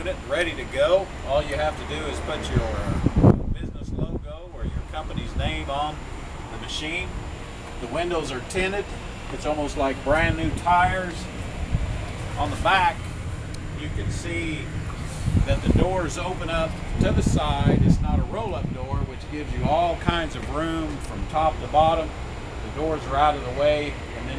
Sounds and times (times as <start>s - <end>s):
Speech: 0.0s - 3.0s, 3.6s - 7.2s, 7.8s - 11.3s, 12.4s - 13.0s, 13.8s - 14.7s, 15.5s - 24.3s.